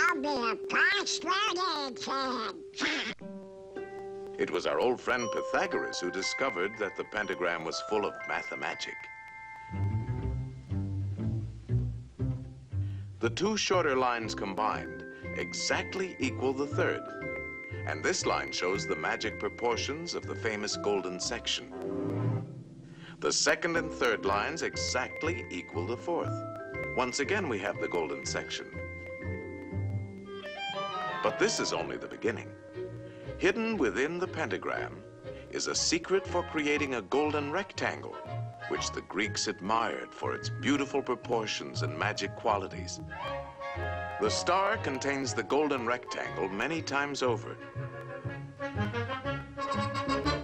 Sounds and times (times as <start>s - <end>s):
Speech: 0.0s - 3.2s, 4.4s - 9.0s, 13.2s - 17.0s, 17.9s - 21.7s, 23.2s - 26.3s, 27.0s - 28.7s, 31.3s - 32.5s, 33.4s - 43.0s, 44.2s - 47.6s
Music: 0.0s - 50.4s.